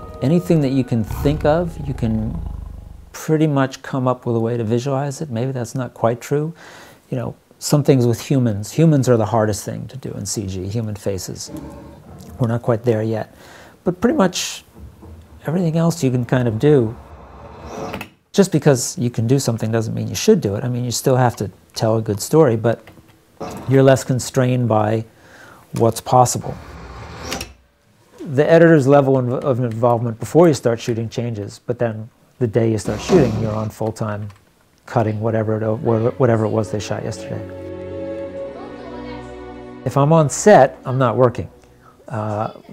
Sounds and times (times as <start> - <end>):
Speech: 0.2 - 2.5, 3.2 - 11.6, 12.2 - 14.7, 15.4 - 17.0, 18.4 - 22.8, 23.7 - 25.1, 25.7 - 26.6, 28.2 - 37.6, 39.9 - 42.7.